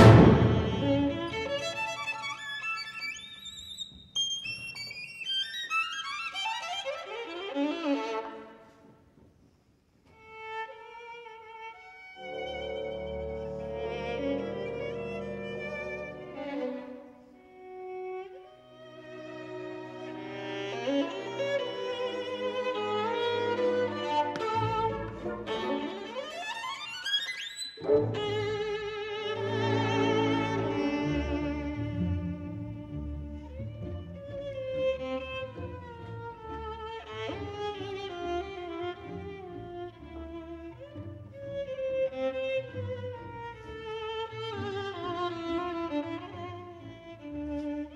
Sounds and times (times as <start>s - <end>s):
Cello: 0.0s - 8.9s, 10.1s - 47.9s.